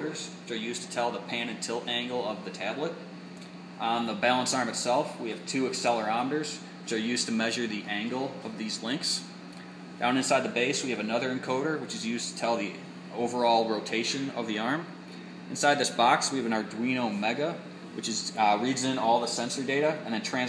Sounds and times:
Speech: 0.0s - 3.1s, 3.8s - 9.4s, 10.0s - 20.4s.

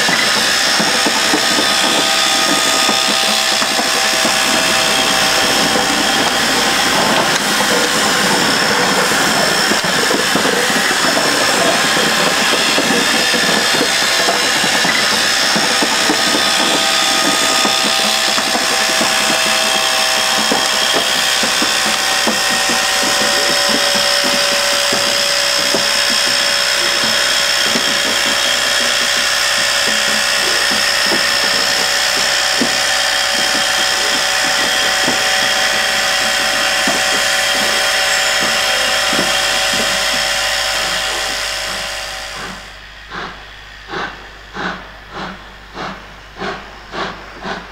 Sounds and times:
Railroad car, train wagon: 0.0s - 47.7s
Train: 0.0s - 47.7s.

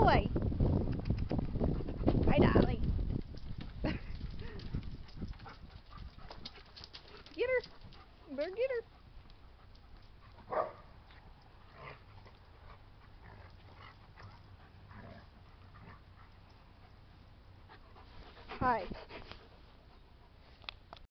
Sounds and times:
Speech: 2.3s - 2.8s, 7.4s - 7.7s, 8.3s - 8.9s, 18.6s - 19.0s.

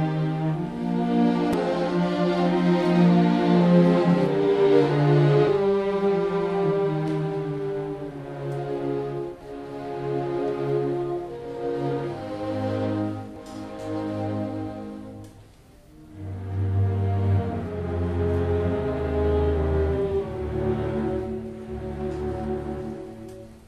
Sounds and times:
Music: 0.0s - 23.6s.

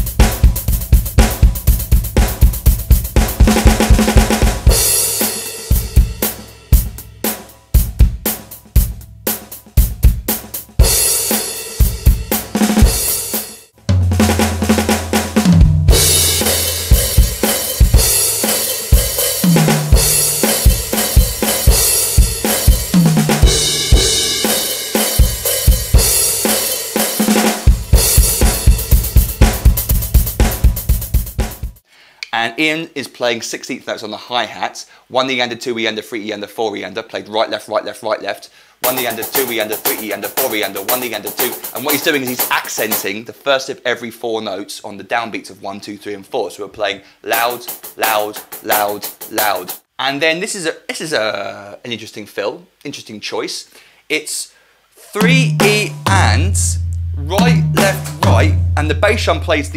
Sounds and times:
Bass drum: 0.0s - 5.0s, 5.7s - 11.0s, 13.8s - 26.4s, 27.7s - 31.8s, 55.2s - 59.7s
Drum kit: 0.0s - 31.8s, 38.8s - 43.2s, 47.4s - 49.9s, 55.0s - 59.7s.

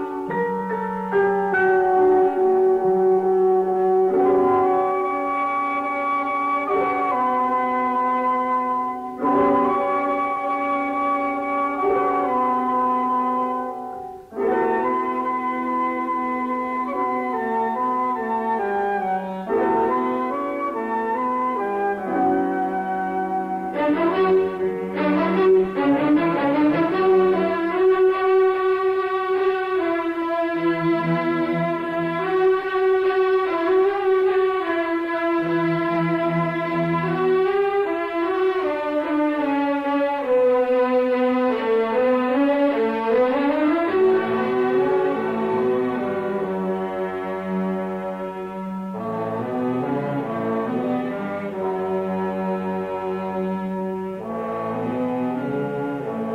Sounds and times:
Music: 0.0s - 56.3s.

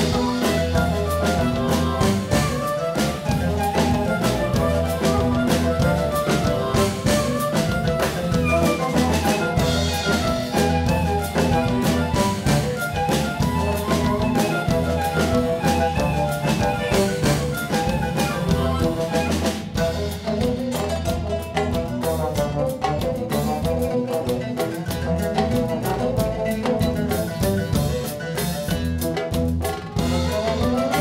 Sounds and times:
Trombone: 0.0s - 31.0s.

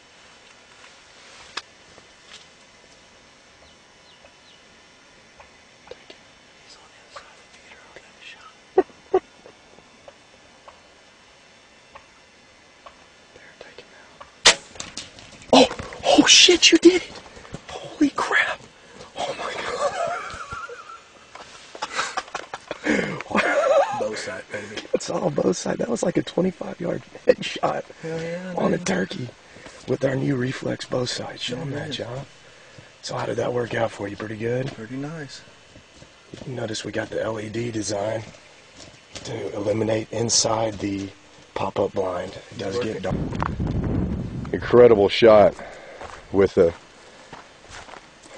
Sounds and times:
Speech: 15.6s - 17.1s, 17.7s - 18.6s, 23.3s - 32.3s, 33.0s - 35.5s, 36.4s - 38.3s, 39.2s - 43.2s, 44.5s - 45.6s, 46.3s - 46.8s.

